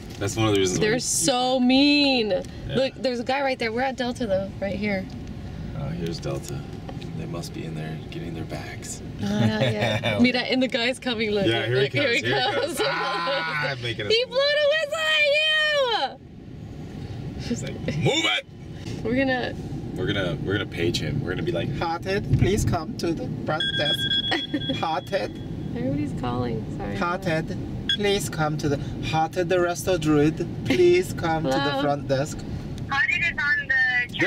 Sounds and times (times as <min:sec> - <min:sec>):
Car: 0:00.0 - 0:34.2
Speech: 0:31.4 - 0:31.9.